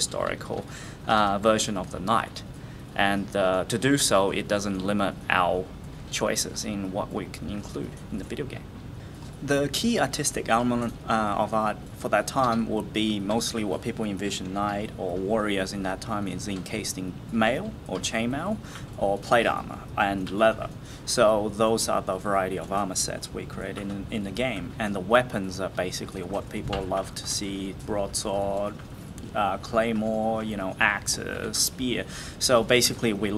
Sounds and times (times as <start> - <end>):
Speech: 0.0 - 8.7, 9.4 - 33.3.